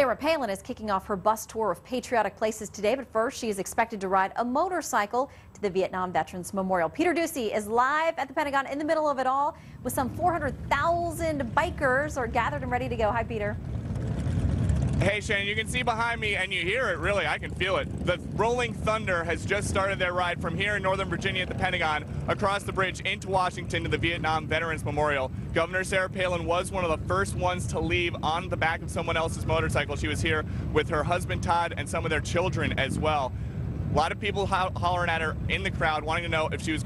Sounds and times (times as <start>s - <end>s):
Speech: 0.0s - 13.6s, 15.0s - 33.3s, 34.0s - 36.8s.